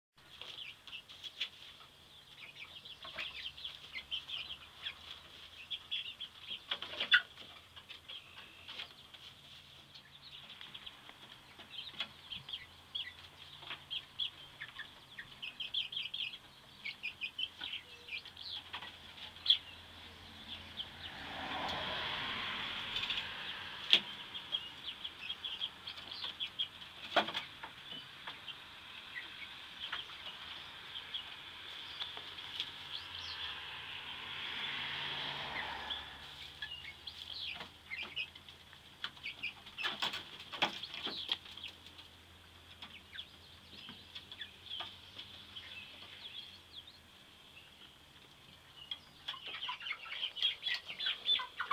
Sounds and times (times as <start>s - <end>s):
Bird: 0.2s - 51.7s.